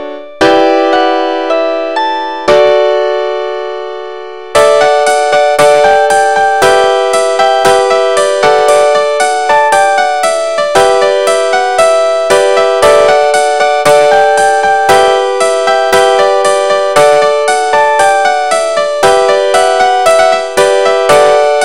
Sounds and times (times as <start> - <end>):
Background music: 0.0 - 21.6.